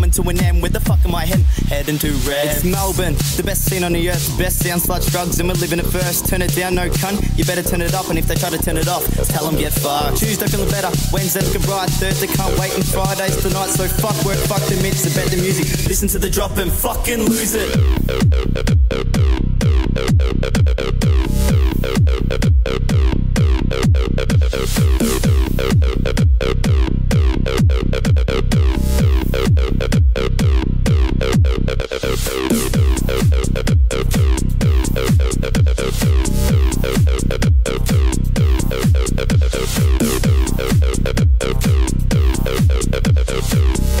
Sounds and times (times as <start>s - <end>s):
Speech: 0.0s - 11.4s, 12.1s - 17.8s
Music: 0.0s - 44.0s.